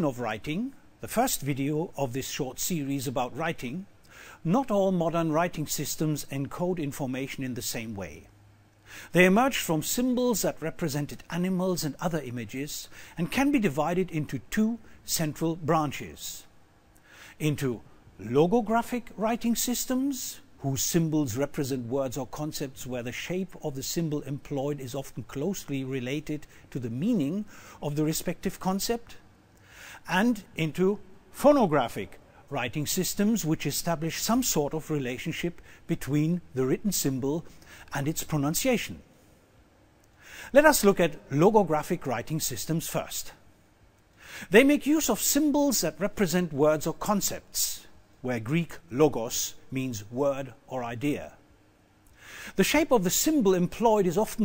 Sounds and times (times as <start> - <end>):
Speech: 0.0 - 8.3, 9.1 - 16.5, 17.4 - 29.2, 30.0 - 39.0, 40.5 - 43.4, 44.5 - 51.4, 52.6 - 54.4.